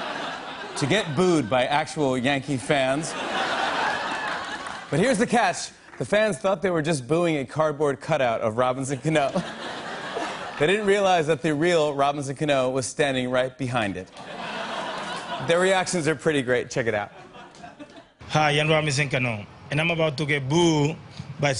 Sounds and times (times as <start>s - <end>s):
Speech: 0.8s - 3.1s, 4.9s - 9.4s, 10.6s - 14.1s, 18.3s - 21.5s.